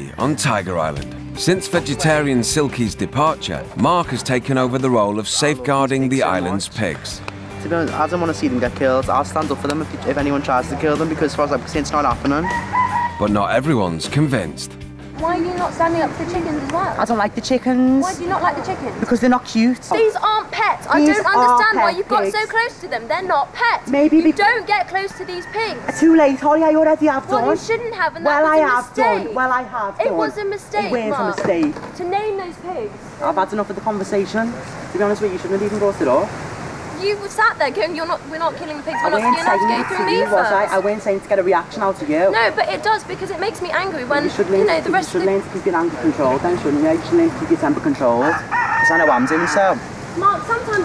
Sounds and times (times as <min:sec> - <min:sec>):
Music: 0:00.0 - 0:18.8.